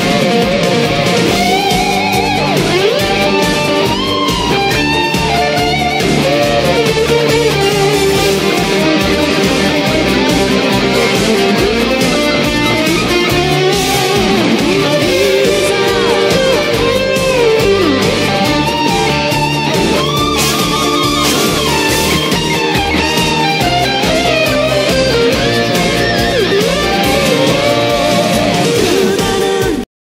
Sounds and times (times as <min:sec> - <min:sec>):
Strum: 0:00.0 - 0:29.8
Electric guitar: 0:00.0 - 0:29.9.